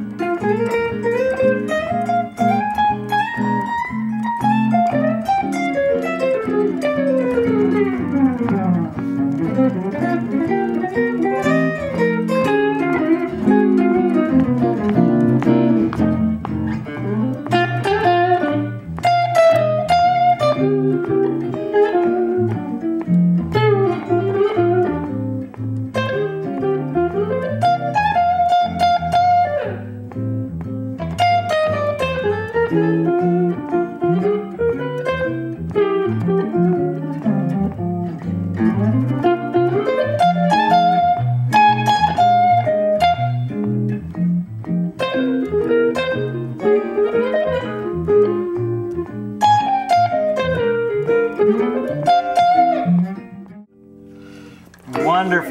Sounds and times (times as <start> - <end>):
Blues: 0.0 - 55.5
Guitar: 0.0 - 55.5.